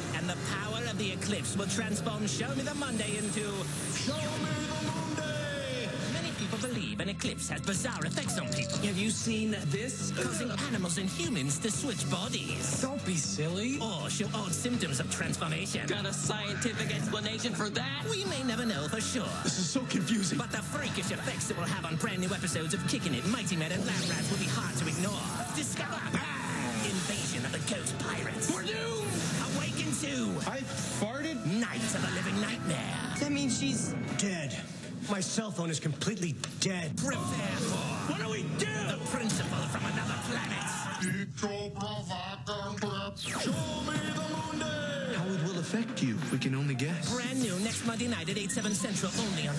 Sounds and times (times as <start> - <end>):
Music: 0.0 - 49.5
Speech: 0.0 - 49.5.